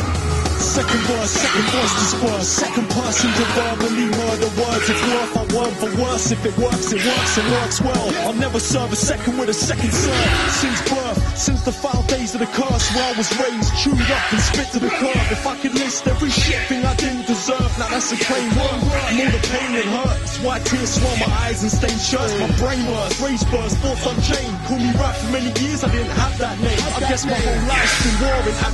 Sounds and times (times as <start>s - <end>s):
Music: 0.0s - 28.7s
Rapping: 0.6s - 28.7s.